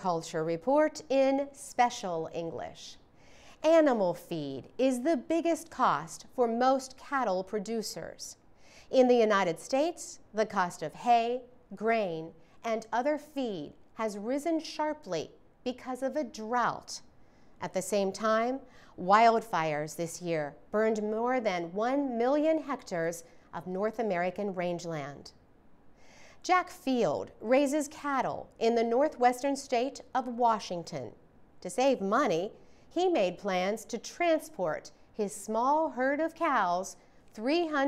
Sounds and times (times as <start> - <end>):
Speech: 0.0 - 3.0, 3.6 - 25.4, 26.4 - 37.8.